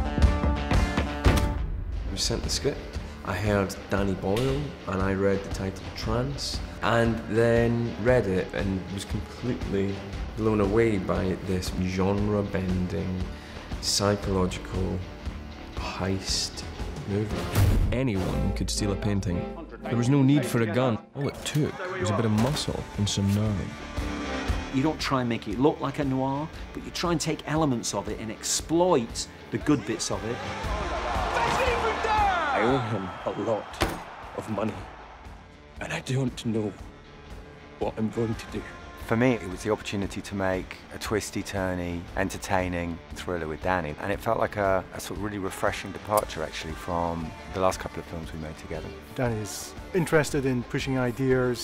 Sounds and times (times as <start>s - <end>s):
Music: 0.0s - 51.6s
Speech: 2.1s - 15.0s, 15.8s - 23.7s, 24.8s - 30.4s, 34.4s - 34.8s, 37.8s - 51.6s.